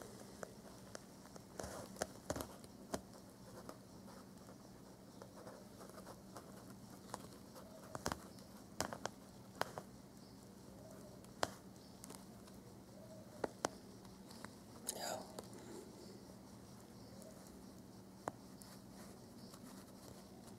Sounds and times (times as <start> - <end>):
Insect: 0.0 - 20.5
Inside, small room: 0.0 - 20.5.